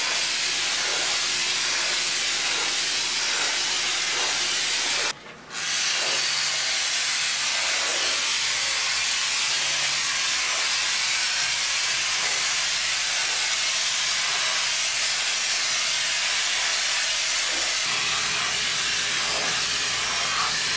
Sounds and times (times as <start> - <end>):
Spray: 0.0 - 20.7.